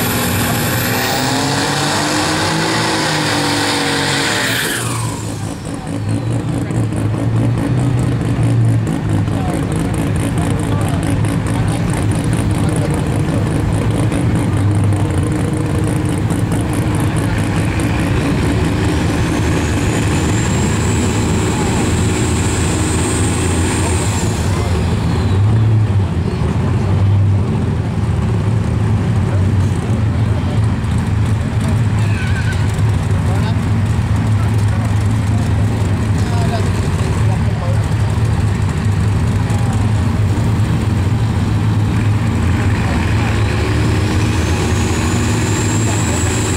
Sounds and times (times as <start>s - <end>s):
Truck: 0.0s - 46.5s
Speech: 9.2s - 13.7s, 29.2s - 30.8s, 32.0s - 38.5s, 39.3s - 40.2s.